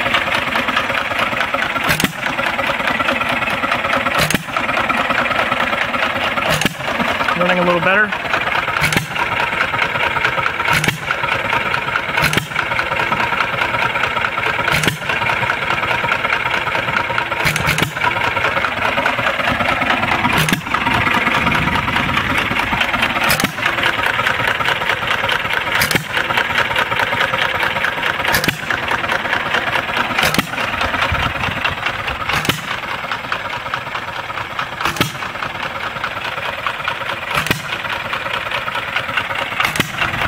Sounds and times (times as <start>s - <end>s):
Idling: 0.0s - 40.2s
Medium engine (mid frequency): 0.0s - 40.2s.